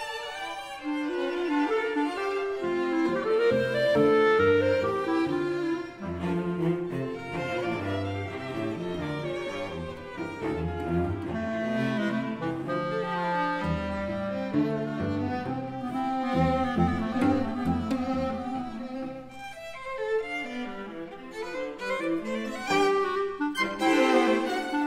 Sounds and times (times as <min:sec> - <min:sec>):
Cello: 0:00.0 - 0:24.8
Clarinet: 0:00.0 - 0:24.8
Classical music: 0:00.0 - 0:24.8
String section: 0:00.0 - 0:24.8
Violin, fiddle: 0:00.0 - 0:24.8.